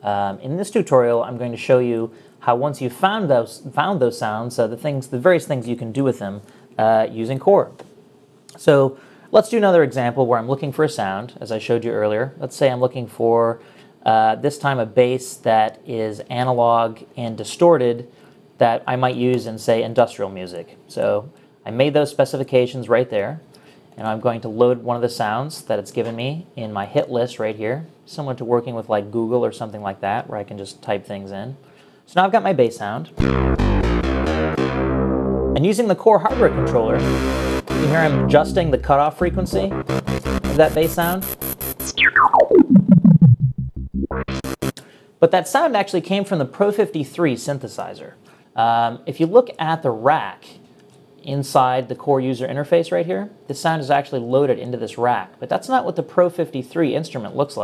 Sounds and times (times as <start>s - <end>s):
Speech: 0.0s - 7.8s, 8.5s - 33.2s, 35.6s - 37.0s, 37.8s - 39.8s, 40.6s - 41.3s, 45.2s - 57.6s.